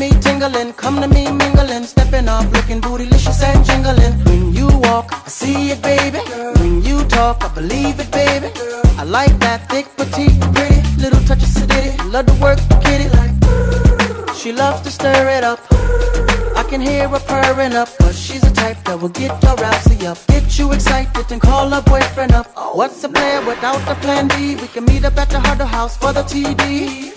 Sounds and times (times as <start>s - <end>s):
Music: 0.0s - 27.1s.